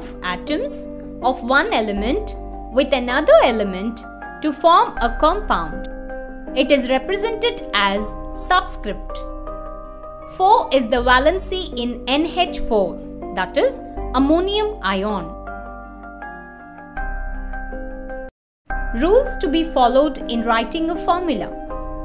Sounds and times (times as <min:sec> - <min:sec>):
Speech: 0:00.0 - 0:05.9, 0:06.6 - 0:09.2, 0:10.4 - 0:15.4, 0:19.0 - 0:21.6
Music: 0:00.0 - 0:22.0.